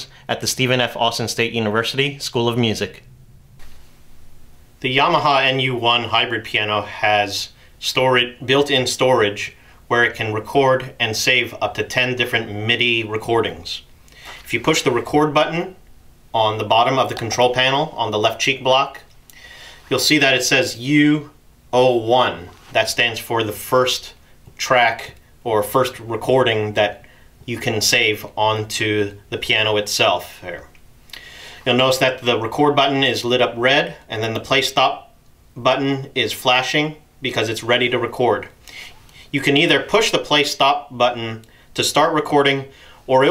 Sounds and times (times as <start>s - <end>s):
Speech: 0.0s - 3.1s, 4.8s - 13.9s, 14.5s - 15.8s, 16.4s - 19.1s, 19.9s - 30.8s, 31.6s - 38.6s, 39.3s - 43.3s.